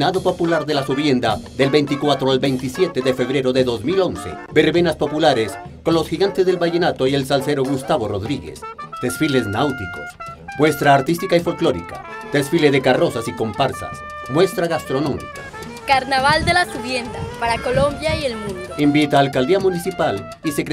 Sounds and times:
Speech: 0:00.0 - 0:15.3, 0:15.9 - 0:20.7
Music: 0:00.0 - 0:20.7.

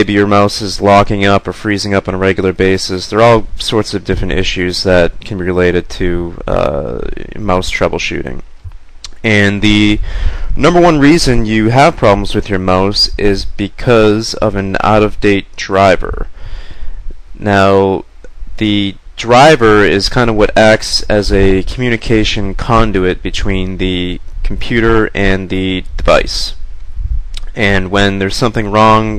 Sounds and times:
Speech: 0:00.0 - 0:08.5, 0:09.1 - 0:16.4, 0:17.4 - 0:26.6, 0:27.4 - 0:29.1.

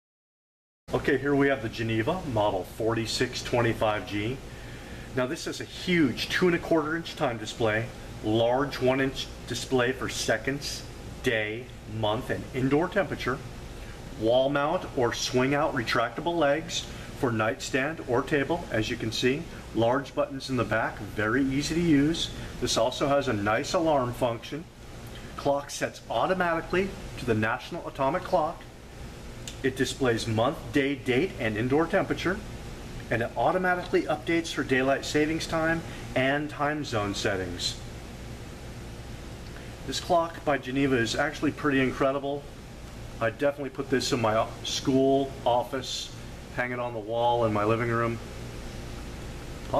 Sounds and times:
Speech: 0:00.9 - 0:04.4, 0:05.2 - 0:13.5, 0:14.2 - 0:24.7, 0:25.4 - 0:28.7, 0:29.5 - 0:32.5, 0:33.1 - 0:37.8, 0:39.9 - 0:42.5, 0:43.2 - 0:48.3.

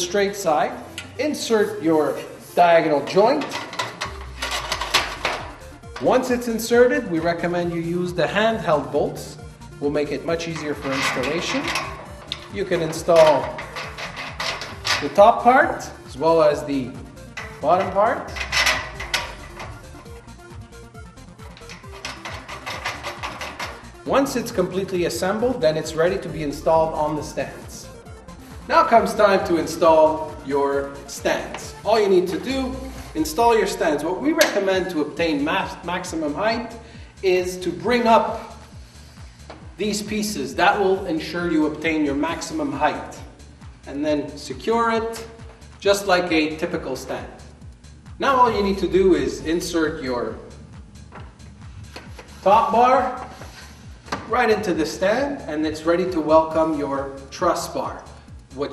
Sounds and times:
Speech: 0:00.0 - 0:03.5, 0:06.0 - 0:11.7, 0:12.5 - 0:13.6, 0:15.0 - 0:17.0, 0:17.6 - 0:18.3, 0:24.1 - 0:27.9, 0:28.7 - 0:38.4, 0:39.8 - 0:43.2, 0:43.9 - 0:47.4, 0:48.2 - 0:50.5, 0:52.4 - 0:53.2, 0:54.3 - 0:58.7
Music: 0:00.0 - 0:58.7.

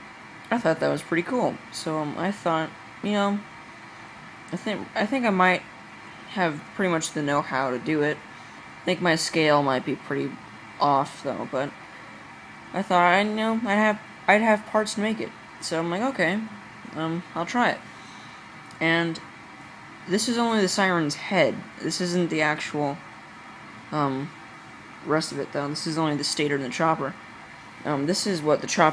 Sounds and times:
Speech: 0:00.5 - 0:03.5, 0:04.5 - 0:05.6, 0:06.3 - 0:08.2, 0:08.9 - 0:11.8, 0:12.7 - 0:17.8, 0:18.7 - 0:19.2, 0:20.1 - 0:23.0, 0:24.0 - 0:24.4, 0:25.0 - 0:27.2, 0:27.8 - 0:28.9.

